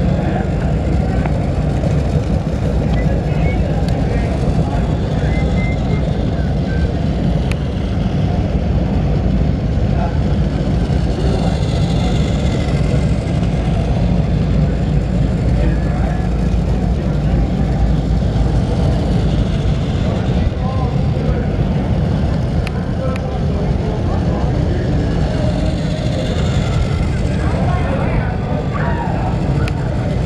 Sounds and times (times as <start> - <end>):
Speech: 0.0 - 30.2.